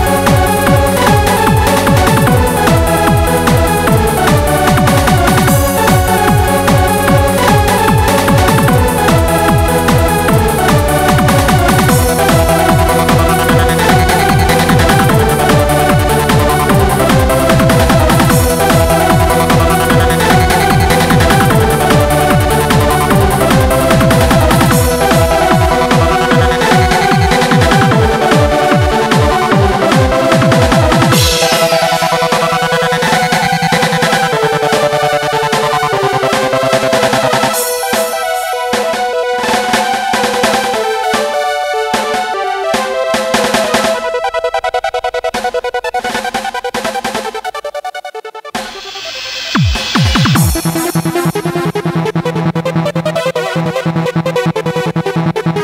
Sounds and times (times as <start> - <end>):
Trance music: 0.0 - 55.6.